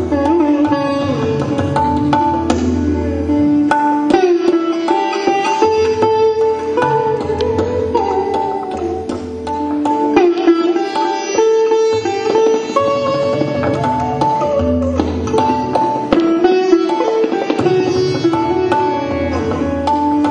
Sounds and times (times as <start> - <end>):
Sitar: 0.0 - 20.3.